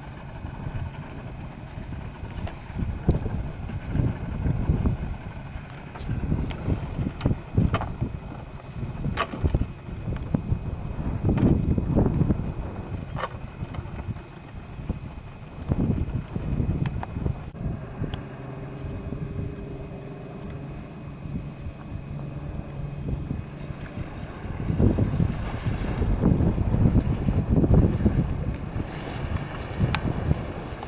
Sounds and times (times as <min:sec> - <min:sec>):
Sailboat, sailing ship: 0:00.0 - 0:30.8.